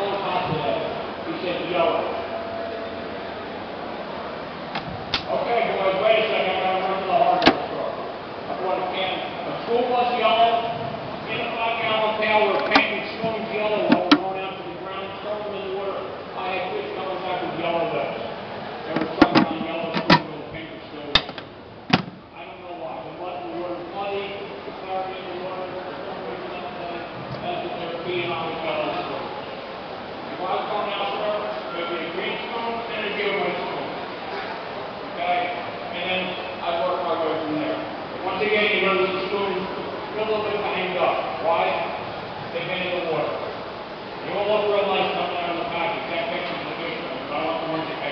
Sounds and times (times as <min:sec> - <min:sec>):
Speech: 0:00.0 - 0:02.3, 0:05.3 - 0:21.2, 0:22.3 - 0:29.5, 0:30.3 - 0:34.5, 0:35.2 - 0:43.5, 0:44.2 - 0:48.1.